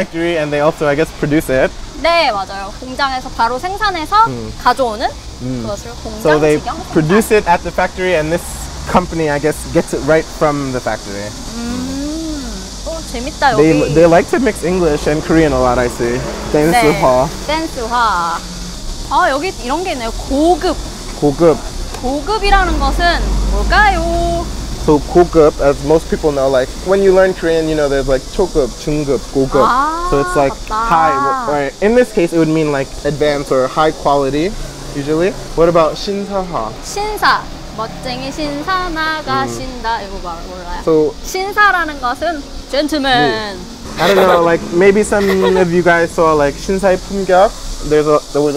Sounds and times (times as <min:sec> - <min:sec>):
Outside, urban or manmade: 0:00.0 - 0:48.5
Speech: 0:05.4 - 0:07.3, 0:13.4 - 0:14.4, 0:16.6 - 0:17.3, 0:29.2 - 0:31.9, 0:39.2 - 0:40.2, 0:43.0 - 0:46.2.